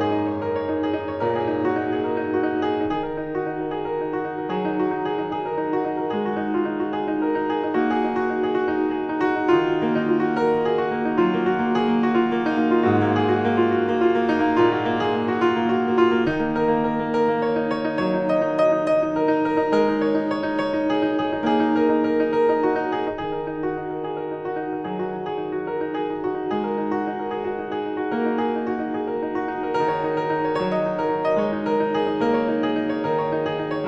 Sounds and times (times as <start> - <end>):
Music: 0.0 - 33.8.